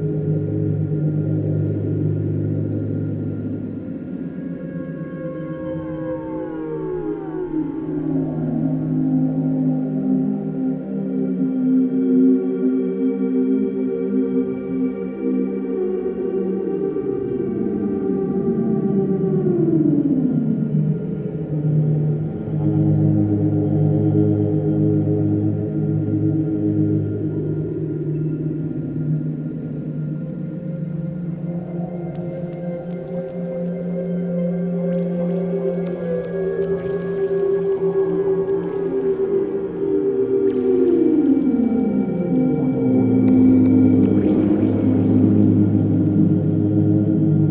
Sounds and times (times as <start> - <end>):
Ambient music: 0.0 - 47.5.